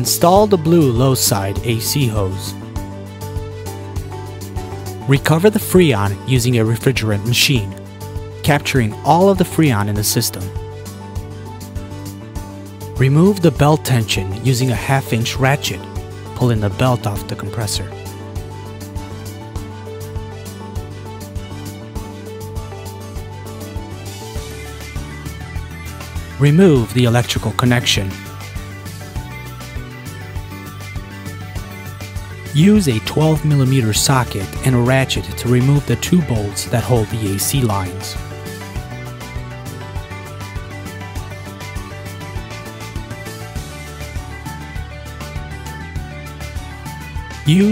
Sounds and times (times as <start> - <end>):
Speech: 0.0 - 2.6, 5.0 - 7.8, 8.4 - 10.6, 13.0 - 18.0, 26.4 - 28.3, 32.5 - 38.2, 47.5 - 47.7
Music: 0.0 - 47.7.